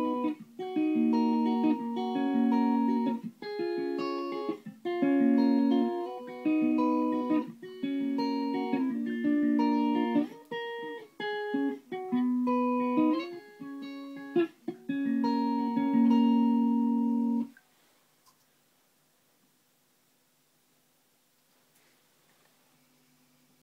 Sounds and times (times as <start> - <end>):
Guitar: 0.0 - 17.6.